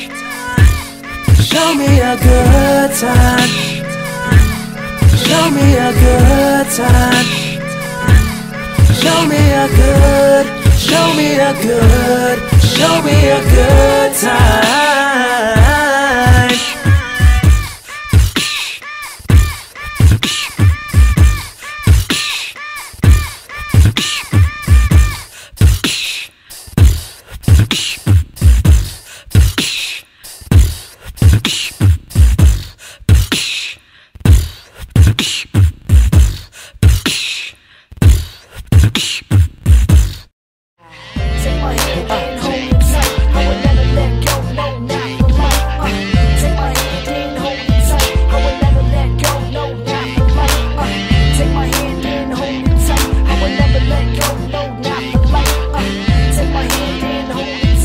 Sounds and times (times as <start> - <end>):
Singing: 0.0 - 25.3, 40.8 - 57.8
Hip hop music: 0.0 - 26.0, 40.8 - 57.8.